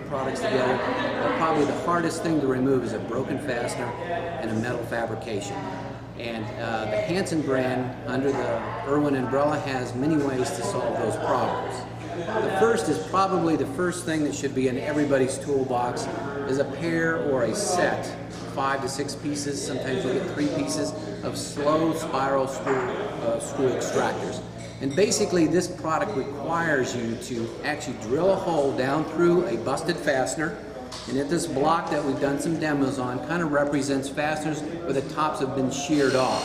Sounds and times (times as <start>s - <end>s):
Speech: 0.0s - 36.4s.